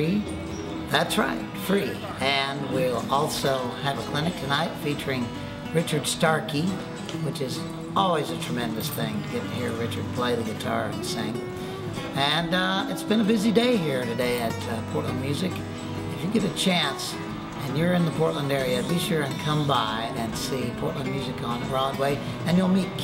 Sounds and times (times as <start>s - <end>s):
Speech: 0.0s - 0.3s, 0.9s - 11.4s, 12.1s - 23.0s
Music: 0.0s - 23.0s.